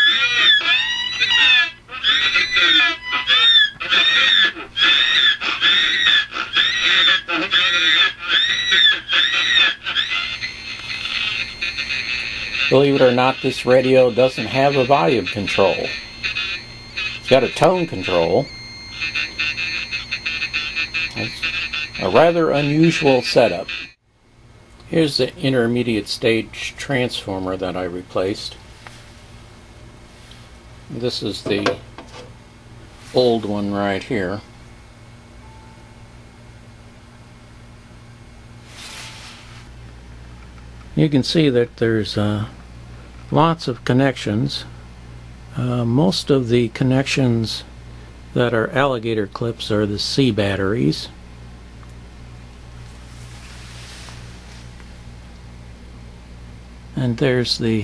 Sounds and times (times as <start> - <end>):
Speech: 12.6 - 16.0, 17.3 - 18.5, 21.2 - 23.7, 24.9 - 28.6, 30.9 - 31.8, 33.1 - 34.5, 41.0 - 42.6, 43.3 - 44.7, 45.6 - 47.7, 48.4 - 51.2, 57.0 - 57.8.